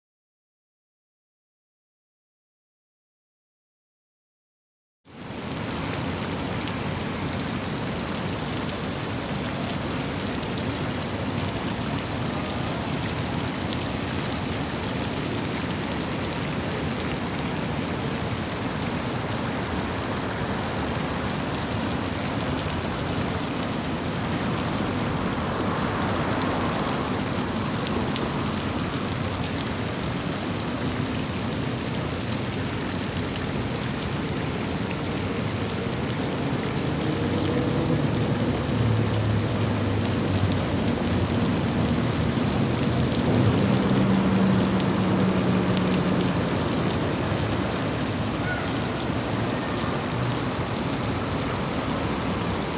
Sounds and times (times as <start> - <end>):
Outside, urban or manmade: 5.1 - 52.7.